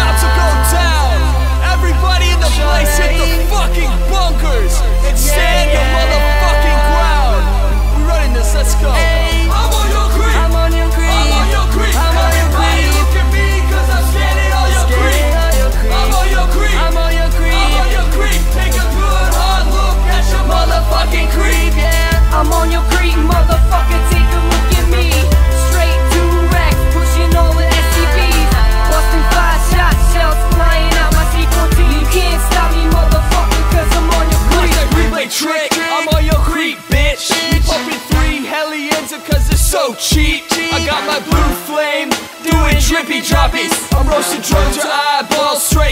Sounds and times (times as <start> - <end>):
Music: 0.0 - 45.9.